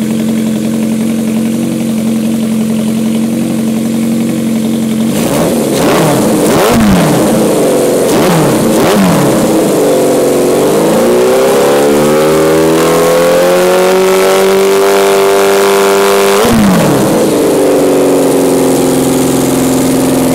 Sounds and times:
Medium engine (mid frequency): 0.0s - 20.3s
Vehicle: 0.0s - 20.3s
Accelerating, revving, vroom: 5.1s - 17.4s.

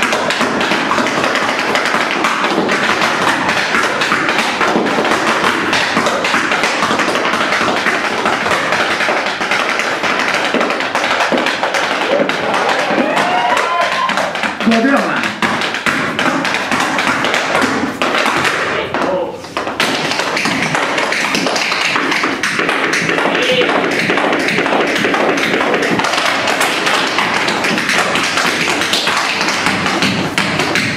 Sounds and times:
Tap: 0.0s - 30.9s
Speech: 14.6s - 15.2s.

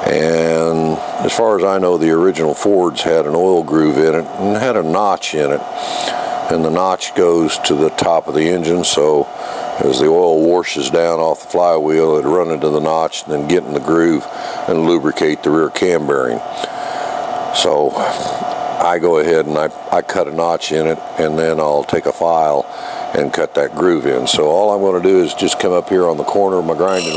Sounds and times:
Speech: 0.0s - 5.7s, 6.5s - 16.5s, 17.5s - 27.1s.

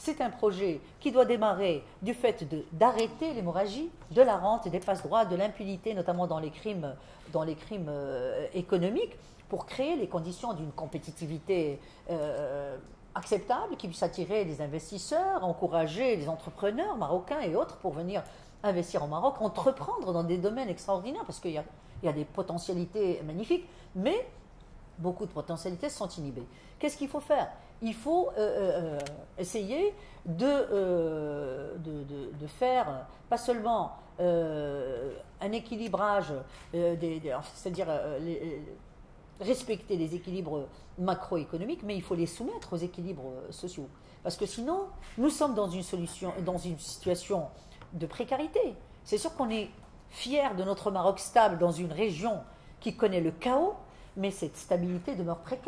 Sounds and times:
Speech: 0.0s - 24.4s, 25.0s - 38.8s, 39.4s - 55.6s.

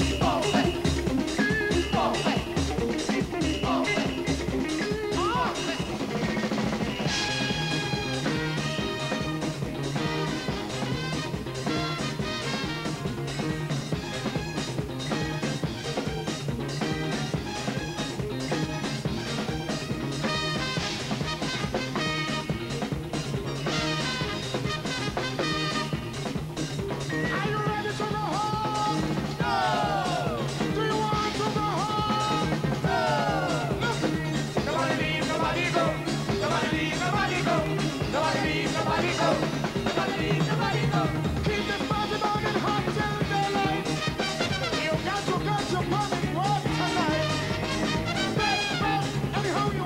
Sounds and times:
Music: 0.0s - 49.8s.

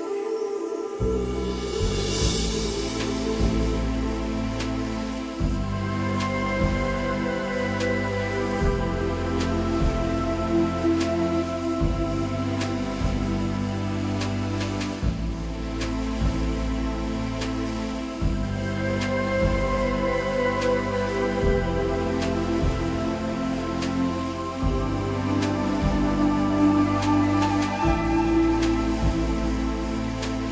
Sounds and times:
Music: 0.0s - 30.5s.

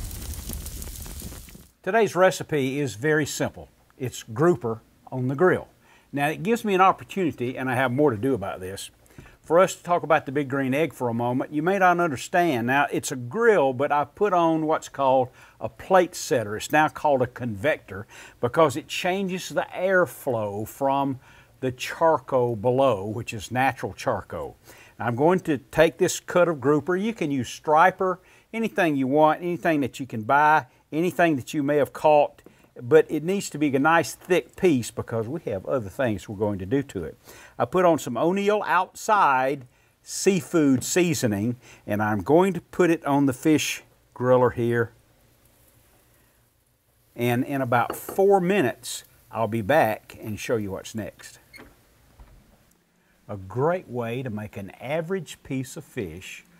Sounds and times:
Speech: 1.8s - 45.0s, 47.2s - 51.4s, 53.3s - 56.5s.

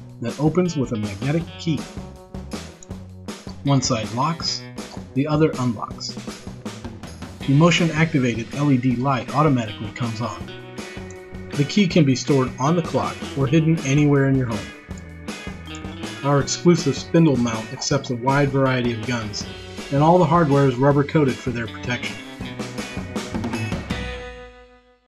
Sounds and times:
Music: 0.0s - 25.1s
Speech: 0.2s - 1.9s, 3.6s - 6.2s, 7.4s - 10.5s, 11.6s - 14.7s, 16.2s - 22.2s.

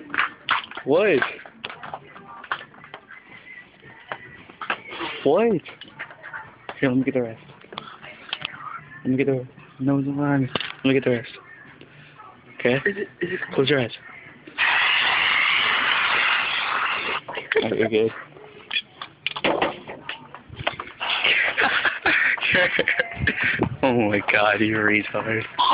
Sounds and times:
Spray: 14.6s - 17.2s.

